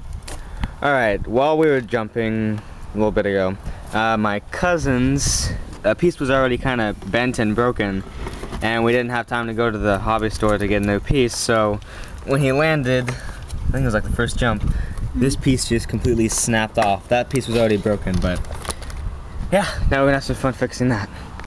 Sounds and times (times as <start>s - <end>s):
Speech: 0.8s - 8.0s, 8.6s - 14.6s, 15.2s - 18.4s, 19.5s - 21.1s.